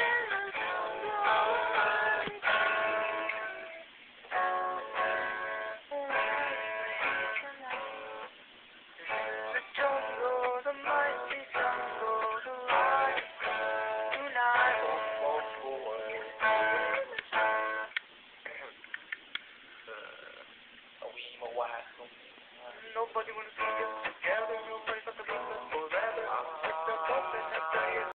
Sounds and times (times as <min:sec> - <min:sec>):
Music: 0:00.0 - 0:08.3, 0:09.0 - 0:18.0, 0:23.1 - 0:28.1
Male singing: 0:05.9 - 0:08.3, 0:09.1 - 0:17.2, 0:22.7 - 0:28.1
Speech: 0:18.4 - 0:18.8, 0:19.9 - 0:23.5.